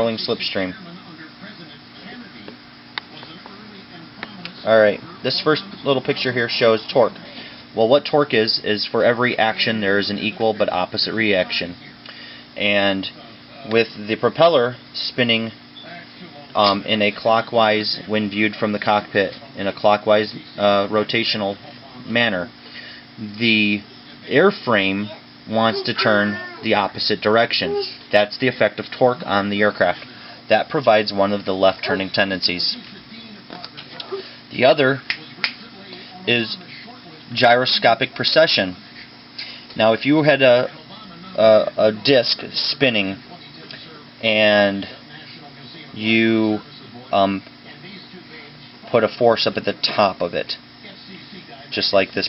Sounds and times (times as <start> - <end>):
Speech: 0.0 - 39.1, 39.7 - 52.2.